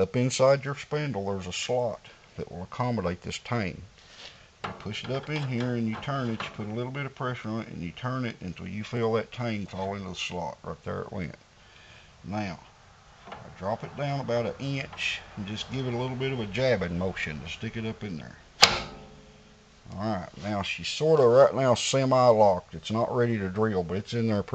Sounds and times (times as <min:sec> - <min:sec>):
Speech: 0:00.0 - 0:03.9, 0:04.8 - 0:11.4, 0:12.2 - 0:12.7, 0:13.4 - 0:18.4, 0:19.9 - 0:24.5.